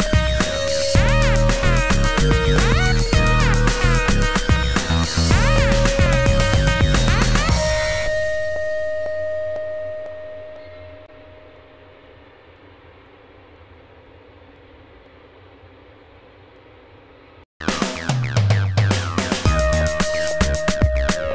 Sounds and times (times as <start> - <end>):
Music: 0.0 - 11.6, 17.6 - 21.3.